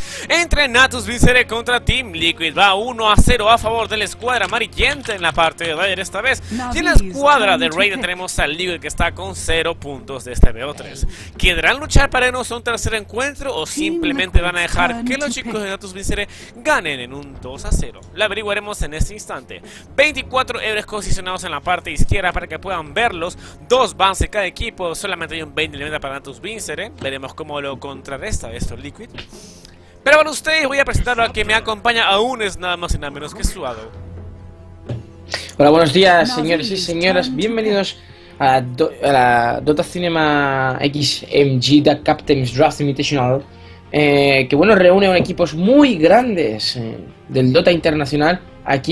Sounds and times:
Speech: 0.3s - 29.2s, 30.1s - 33.9s, 35.5s - 48.9s.

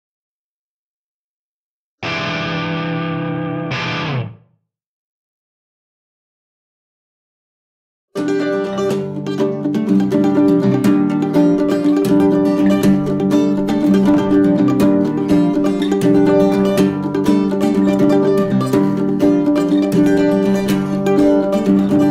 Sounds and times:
Acoustic guitar: 8.2s - 22.1s
Ukulele: 8.2s - 22.1s.

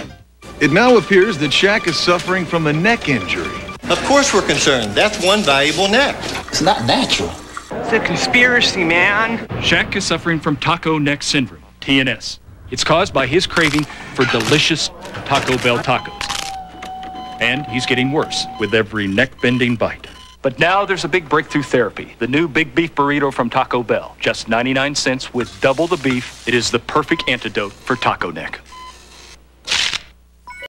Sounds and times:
Speech: 0.6s - 16.2s, 17.4s - 28.6s.

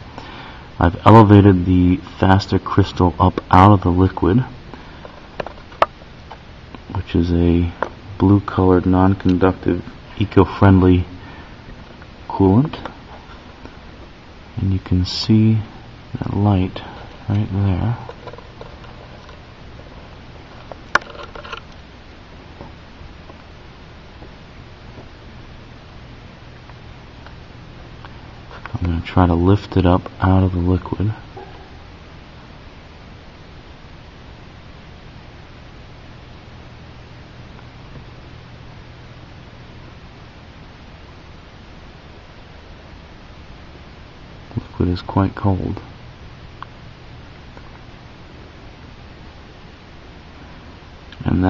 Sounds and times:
Speech: 0.8s - 4.6s, 6.9s - 11.2s, 12.3s - 12.9s, 14.6s - 18.1s, 28.7s - 31.2s, 44.5s - 45.9s, 51.2s - 51.4s.

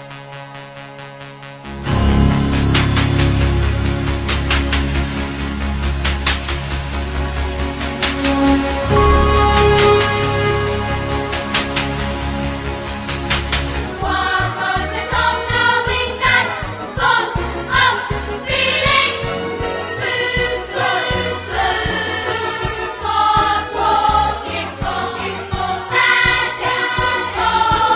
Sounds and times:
Jingle (music): 1.4s - 27.9s.

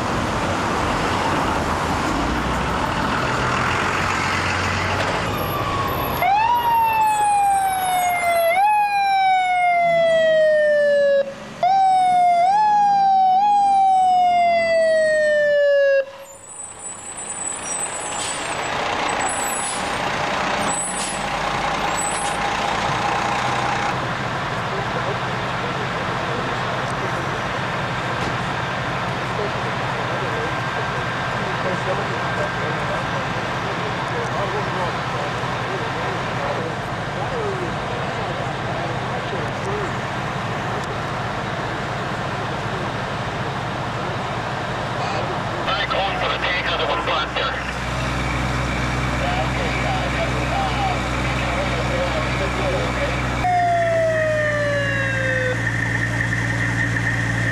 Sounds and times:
Vehicle: 0.0s - 57.5s.

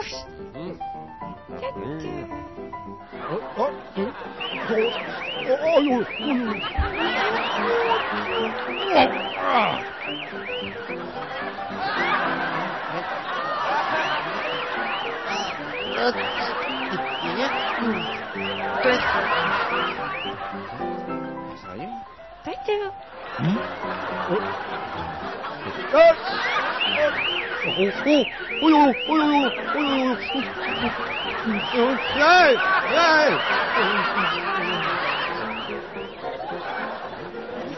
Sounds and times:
Music: 0.0s - 37.7s.

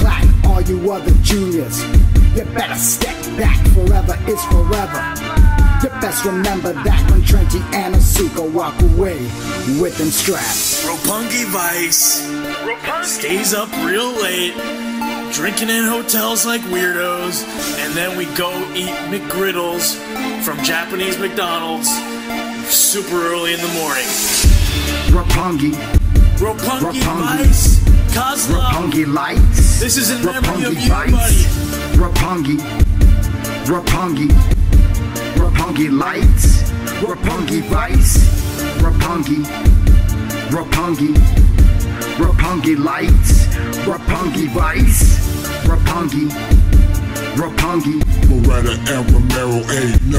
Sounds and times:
Theme music: 0.0s - 50.1s.

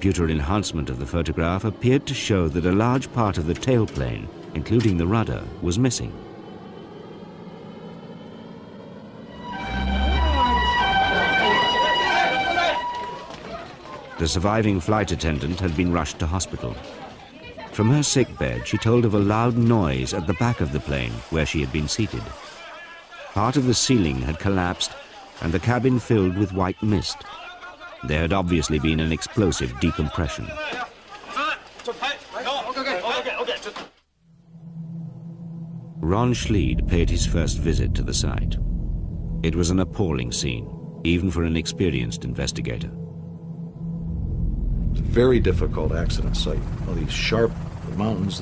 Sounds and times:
Speech: 0.0s - 6.2s, 13.6s - 33.8s, 36.0s - 38.6s, 39.4s - 43.0s, 45.0s - 48.4s.

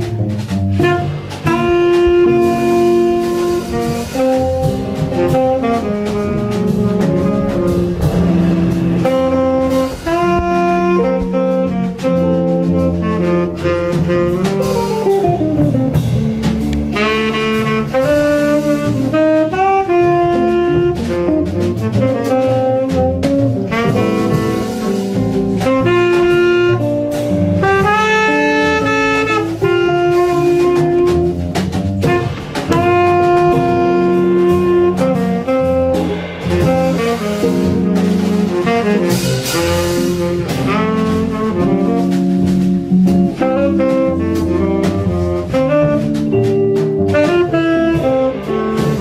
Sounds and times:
Double bass: 0.0s - 49.0s
Drum kit: 0.0s - 49.0s
Jazz: 0.0s - 49.0s
Saxophone: 0.0s - 49.0s.

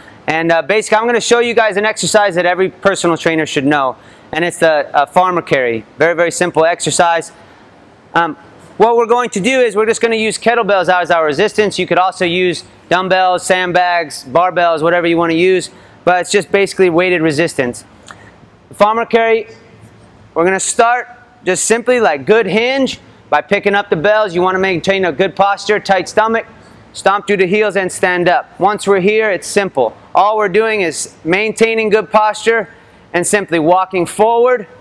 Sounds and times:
Speech: 0.3s - 7.4s, 8.1s - 17.9s, 18.7s - 19.7s, 20.4s - 34.8s.

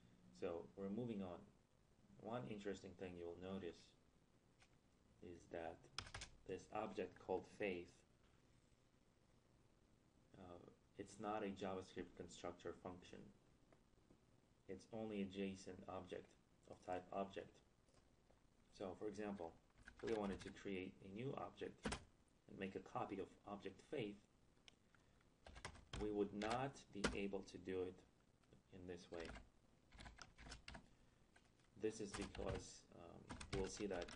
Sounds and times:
Speech: 0.3s - 1.5s, 2.2s - 4.0s, 5.2s - 8.1s, 10.3s - 13.4s, 14.7s - 17.7s, 18.7s - 21.9s, 22.5s - 24.3s, 26.0s - 29.4s, 31.8s - 34.1s.

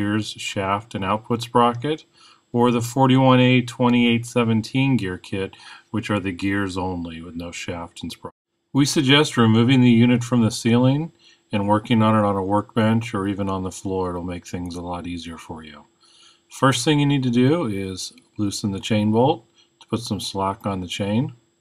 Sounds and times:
Speech: 0.0s - 15.9s, 16.5s - 21.4s.

